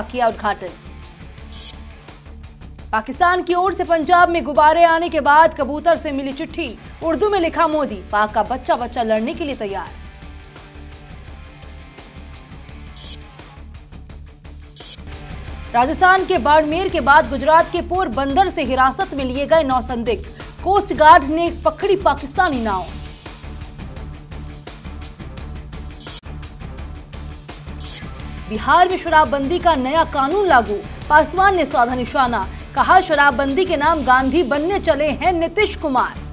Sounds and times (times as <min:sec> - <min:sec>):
Speech: 0:00.0 - 0:00.8, 0:03.0 - 0:10.0, 0:15.8 - 0:22.9, 0:28.5 - 0:36.2
Music: 0:00.0 - 0:36.3.